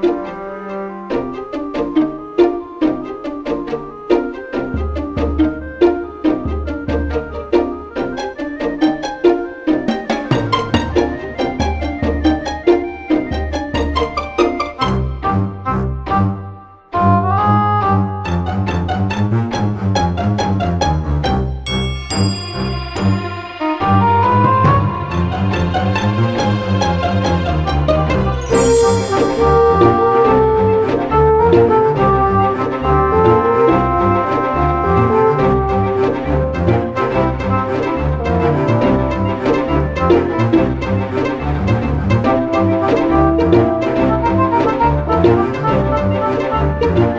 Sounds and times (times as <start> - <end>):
Soundtrack music: 0.0 - 47.1.